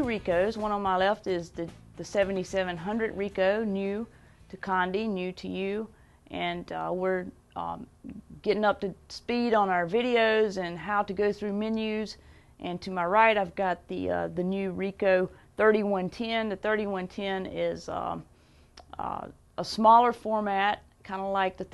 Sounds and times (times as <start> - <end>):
Speech: 0.0 - 21.7.